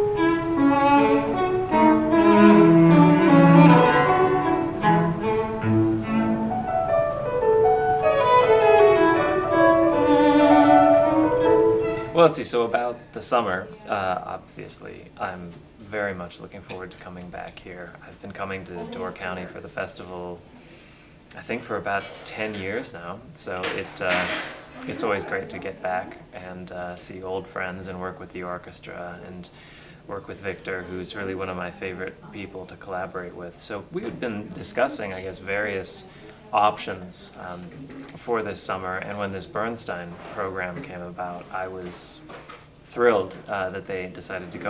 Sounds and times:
Speech: 0:12.2 - 0:20.4, 0:21.3 - 0:29.5, 0:30.1 - 0:42.3, 0:42.9 - 0:44.6.

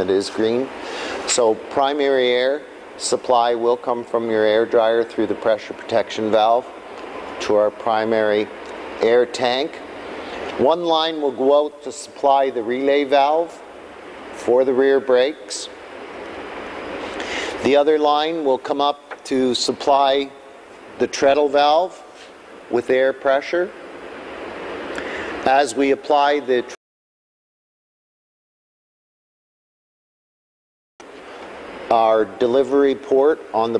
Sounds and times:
Speech: 0:00.0 - 0:00.7, 0:01.3 - 0:06.7, 0:07.4 - 0:09.8, 0:10.6 - 0:13.6, 0:14.4 - 0:15.8, 0:17.6 - 0:20.4, 0:21.0 - 0:22.1, 0:22.7 - 0:23.8, 0:25.4 - 0:26.8, 0:31.9 - 0:33.7.

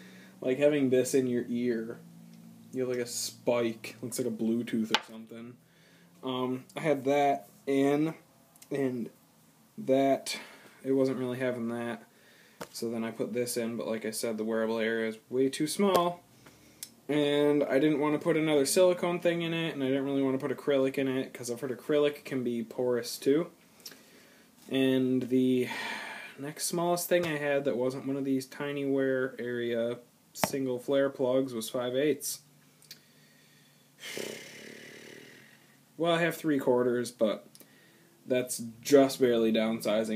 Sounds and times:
Speech: 0:00.4 - 0:02.0, 0:02.8 - 0:05.6, 0:06.2 - 0:09.2, 0:09.8 - 0:12.1, 0:12.8 - 0:16.2, 0:17.1 - 0:23.6, 0:24.7 - 0:25.7, 0:26.4 - 0:32.4, 0:36.0 - 0:37.5, 0:38.3 - 0:40.1.

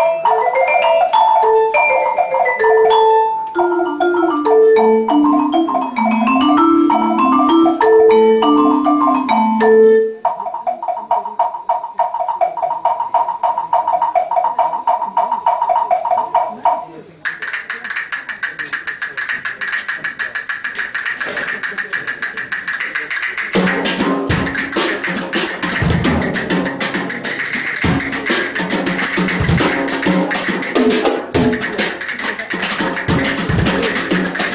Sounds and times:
Vibraphone: 0:00.0 - 0:11.2, 0:23.3 - 0:34.5
Speech: 0:10.3 - 0:12.3, 0:13.6 - 0:23.6, 0:31.3 - 0:34.5.

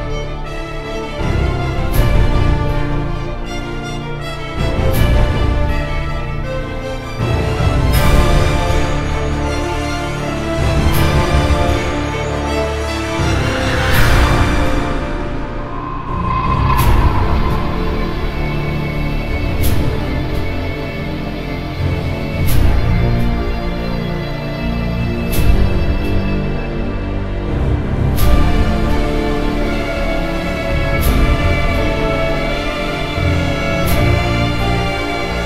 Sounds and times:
Music: 0:00.0 - 0:35.4.

